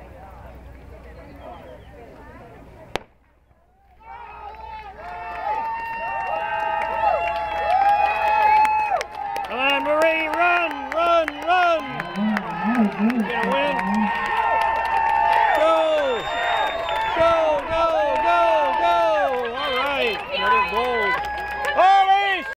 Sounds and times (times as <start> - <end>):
Outside, urban or manmade: 0.0 - 22.5
Speech: 9.5 - 14.1.